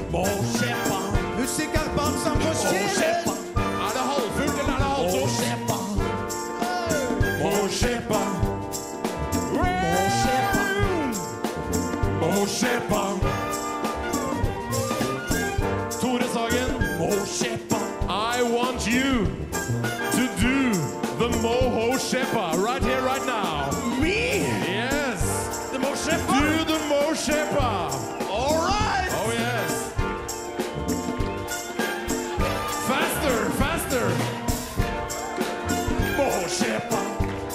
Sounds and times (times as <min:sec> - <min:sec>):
Music: 0:00.0 - 0:37.5.